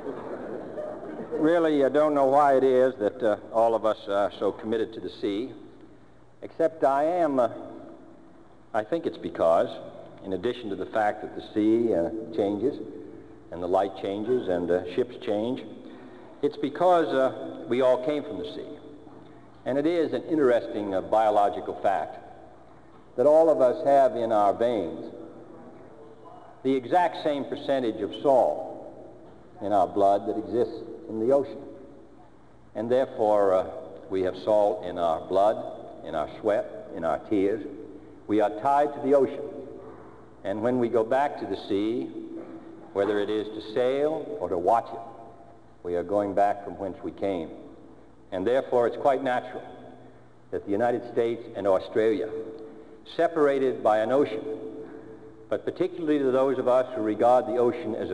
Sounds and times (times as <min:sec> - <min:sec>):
Narration, monologue: 0:00.0 - 0:58.1
Male speech, man speaking: 0:01.3 - 0:05.6, 0:06.4 - 0:07.7, 0:08.7 - 0:15.8, 0:16.4 - 0:18.8, 0:19.6 - 0:22.4, 0:23.2 - 0:25.2, 0:26.6 - 0:28.9, 0:29.6 - 0:31.7, 0:32.8 - 0:39.6, 0:40.4 - 0:42.2, 0:42.9 - 0:45.2, 0:45.8 - 0:47.7, 0:48.3 - 0:49.8, 0:50.5 - 0:54.7, 0:55.5 - 0:58.1.